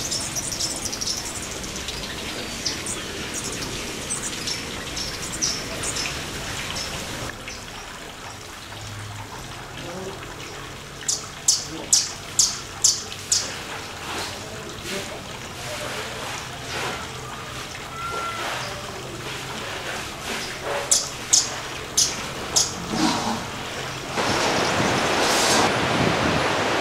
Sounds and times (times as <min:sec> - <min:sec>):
Outside, rural or natural: 0:00.0 - 0:15.1, 0:16.9 - 0:26.8
Water: 0:00.0 - 0:26.8.